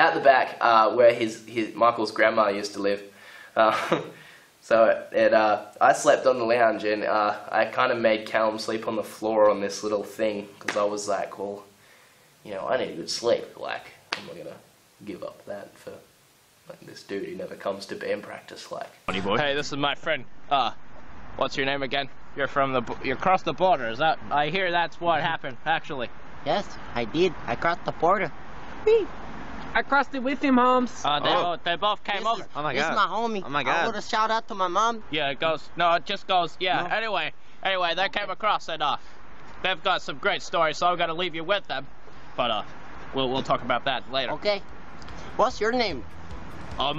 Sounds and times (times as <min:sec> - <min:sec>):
Speech: 0:00.0 - 0:11.7, 0:12.5 - 0:16.1, 0:16.7 - 0:20.8, 0:21.4 - 0:28.3, 0:29.8 - 0:39.0, 0:39.6 - 0:44.6, 0:45.4 - 0:46.0
Inside, small room: 0:00.0 - 0:46.9.